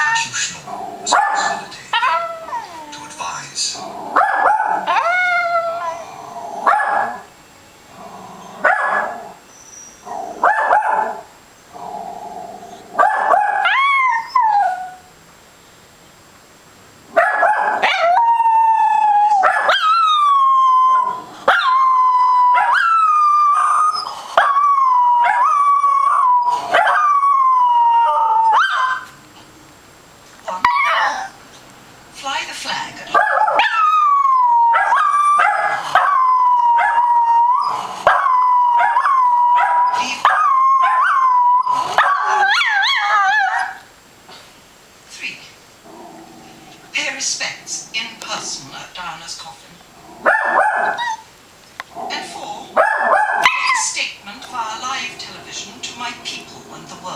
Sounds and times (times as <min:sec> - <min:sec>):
Speech: 0:00.0 - 0:04.0, 0:32.2 - 0:33.2, 0:39.9 - 0:40.4, 0:45.1 - 0:45.6, 0:46.9 - 0:49.8, 0:52.0 - 0:52.8, 0:53.6 - 0:57.1
Bark: 0:01.1 - 0:02.2, 0:04.2 - 0:05.1, 0:06.7 - 0:07.2, 0:08.6 - 0:09.2, 0:10.4 - 0:11.2, 0:13.0 - 0:13.8, 0:17.2 - 0:18.1, 0:19.4 - 0:19.8, 0:26.8 - 0:27.1, 0:33.2 - 0:33.8, 0:50.3 - 0:51.2, 0:52.8 - 0:53.8.